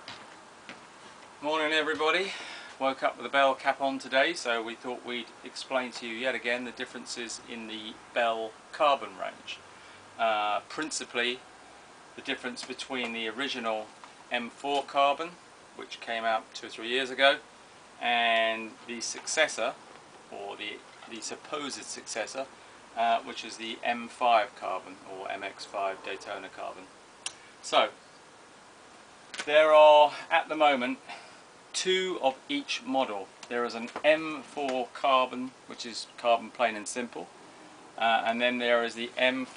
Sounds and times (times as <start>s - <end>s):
Speech: 1.4s - 9.6s, 10.2s - 11.4s, 12.2s - 17.4s, 18.0s - 26.9s, 27.6s - 28.0s, 29.4s - 31.1s, 31.8s - 37.3s, 38.0s - 39.5s.